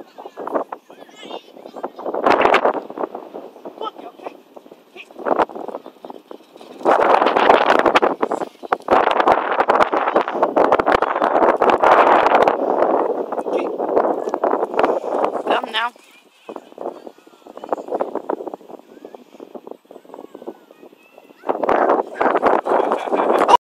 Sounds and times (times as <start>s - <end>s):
Speech: 15.5s - 18.0s.